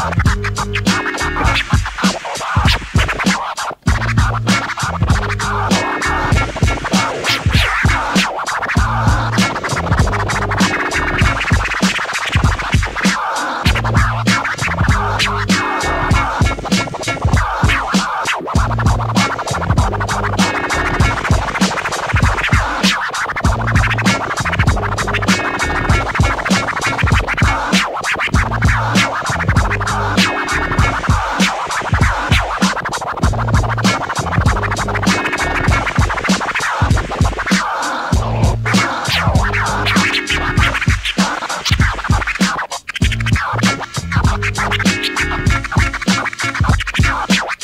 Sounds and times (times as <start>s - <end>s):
Scratching (performance technique): 0.0s - 47.6s.